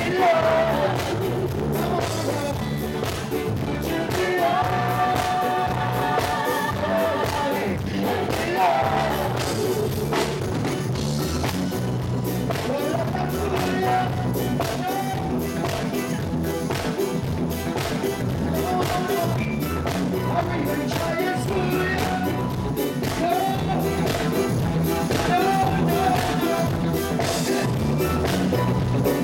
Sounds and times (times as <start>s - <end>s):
Music: 0.0s - 29.2s.